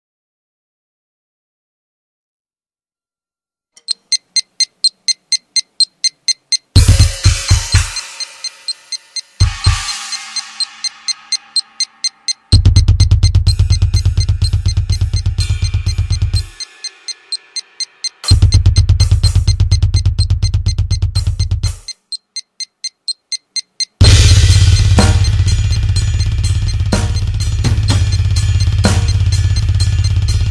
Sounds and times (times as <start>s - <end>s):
Drum kit: 5.8s - 22.1s, 24.0s - 30.5s
Bass drum: 6.8s - 8.0s, 9.4s - 9.9s, 12.0s - 16.6s, 18.2s - 21.9s, 24.0s - 30.5s
Snare drum: 6.8s - 8.8s, 9.4s - 11.9s, 12.5s - 16.7s, 18.2s - 21.9s, 24.0s - 26.3s.